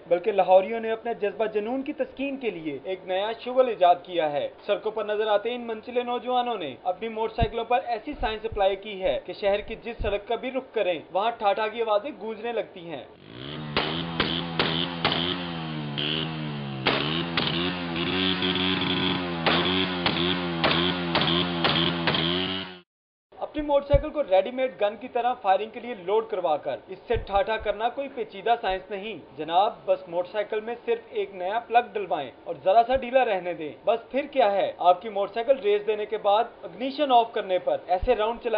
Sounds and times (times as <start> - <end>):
Speech: 0.1 - 13.1, 23.4 - 38.5.